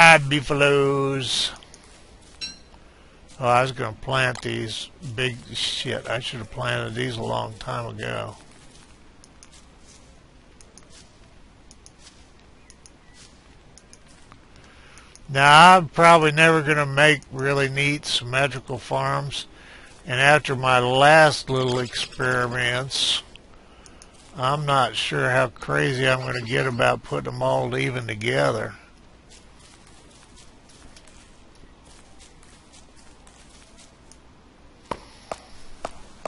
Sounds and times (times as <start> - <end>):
Speech: 0.0 - 1.6, 3.4 - 8.4, 15.3 - 19.5, 20.1 - 23.3, 24.4 - 28.8.